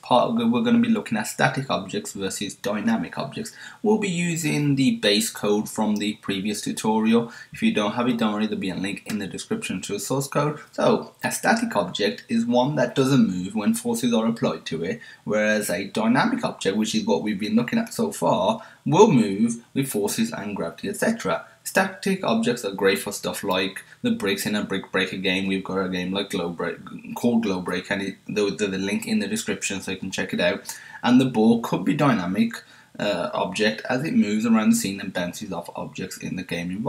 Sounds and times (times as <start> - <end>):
Speech: 0.0 - 36.8.